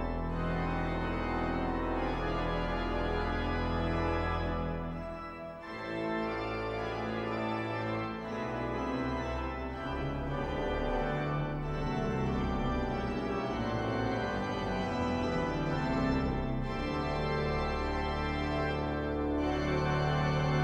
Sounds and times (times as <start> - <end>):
Music: 0.0 - 20.6.